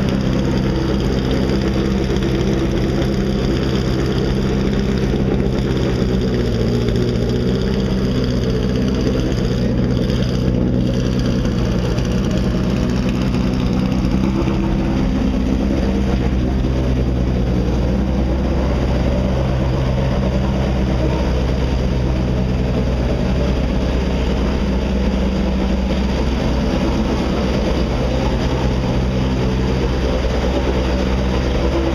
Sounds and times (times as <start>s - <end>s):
Car: 0.0s - 31.9s.